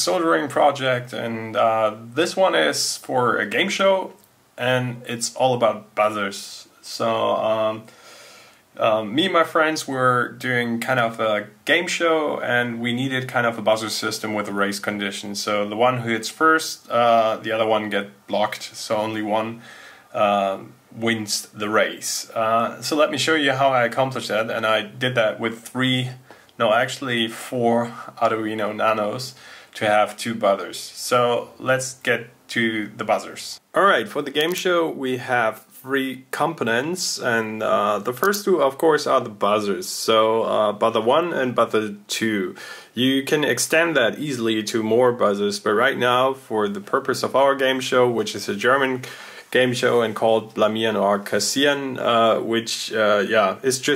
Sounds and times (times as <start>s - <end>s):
Speech: 0.0s - 7.9s, 8.8s - 53.9s.